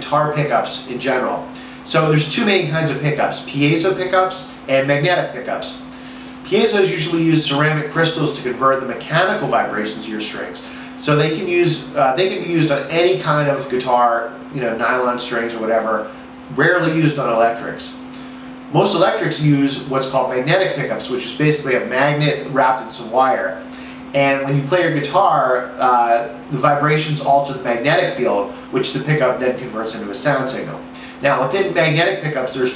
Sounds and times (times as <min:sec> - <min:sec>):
Speech: 0:00.0 - 0:32.7.